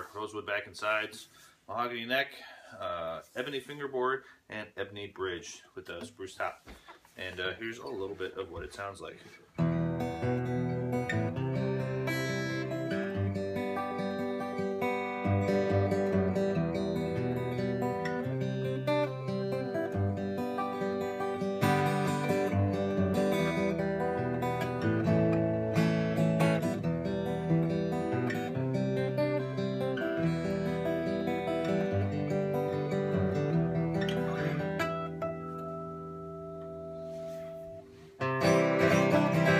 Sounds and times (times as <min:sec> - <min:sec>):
Acoustic guitar: 0:05.0 - 0:39.5
Strum: 0:06.8 - 0:39.5.